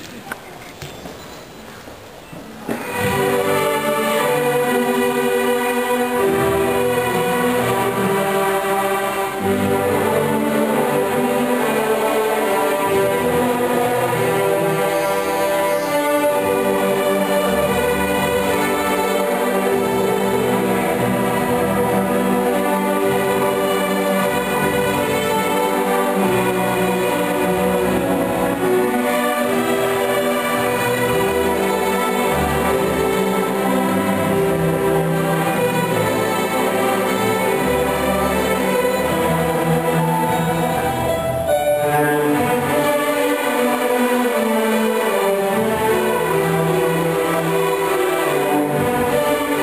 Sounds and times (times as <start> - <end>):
Music: 2.6 - 49.6.